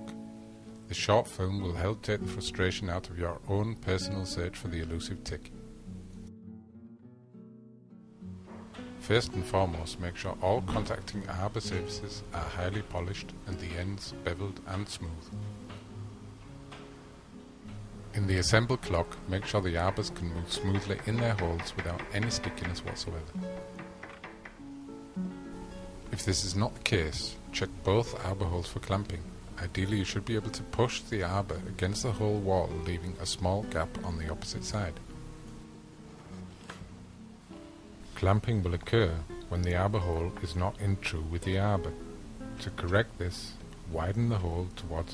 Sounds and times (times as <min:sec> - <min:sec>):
Music: 0:00.0 - 0:45.1
Speech: 0:00.9 - 0:05.5, 0:09.0 - 0:15.3, 0:18.1 - 0:23.3, 0:26.1 - 0:35.0, 0:38.1 - 0:42.0, 0:42.6 - 0:45.1.